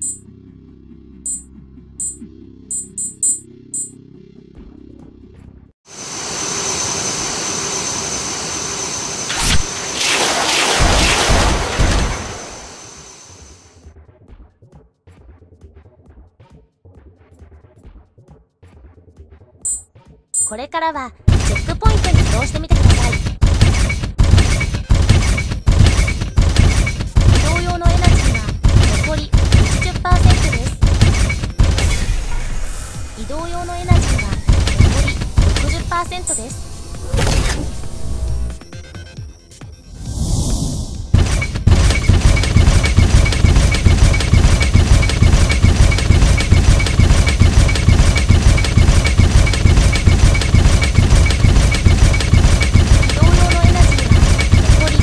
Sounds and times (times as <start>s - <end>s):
Music: 0.0s - 5.8s, 13.8s - 21.8s, 37.8s - 40.1s.